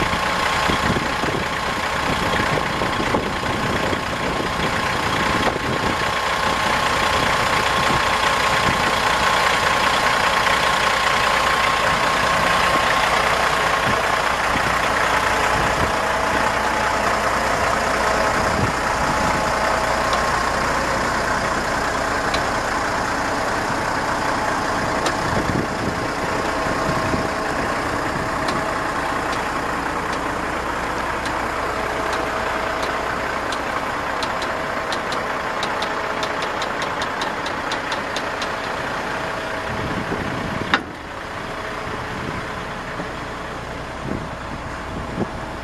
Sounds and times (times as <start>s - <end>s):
Truck: 0.0s - 45.6s.